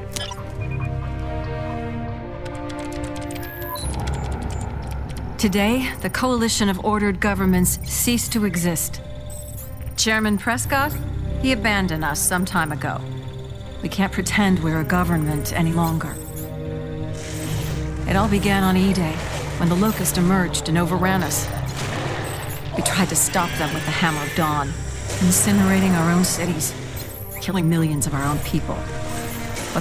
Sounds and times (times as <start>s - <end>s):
Music: 0.0s - 29.8s
Speech: 5.4s - 9.0s, 10.0s - 13.0s, 13.8s - 16.2s, 18.1s - 21.5s, 22.8s - 26.7s, 27.4s - 28.8s.